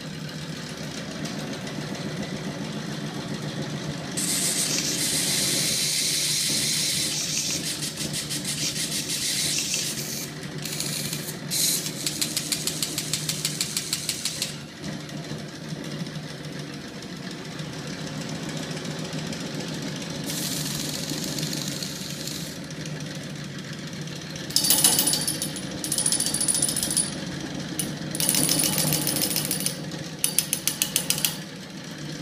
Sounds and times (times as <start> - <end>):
Engine: 0.0 - 32.2.